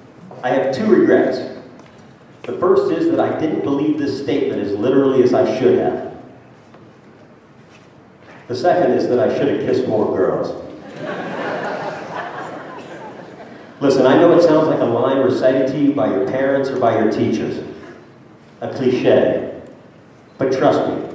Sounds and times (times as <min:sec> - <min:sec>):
Male speech, man speaking: 0:00.4 - 0:01.6, 0:02.5 - 0:06.2, 0:08.5 - 0:10.7, 0:13.8 - 0:17.8, 0:18.6 - 0:19.6, 0:20.4 - 0:21.1.